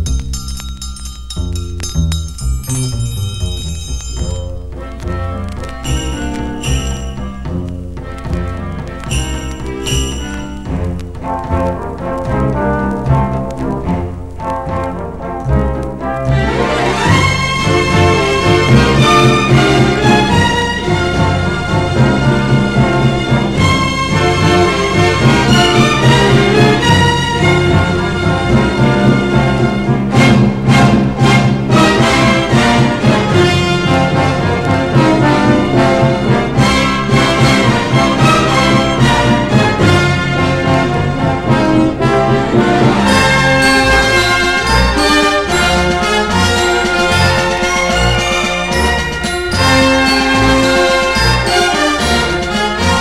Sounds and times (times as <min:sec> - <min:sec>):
Music: 0:00.0 - 0:53.0.